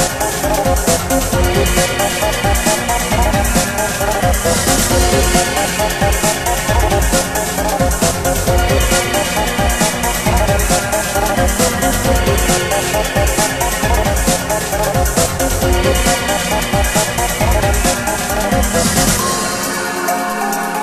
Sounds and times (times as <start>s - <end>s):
Music: 0.0s - 20.8s.